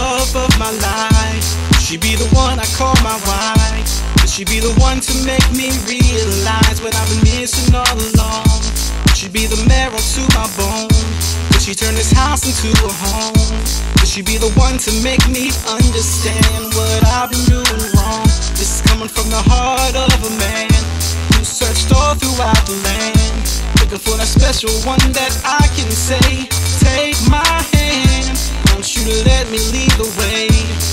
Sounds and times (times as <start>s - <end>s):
Jazz: 0.0s - 30.9s.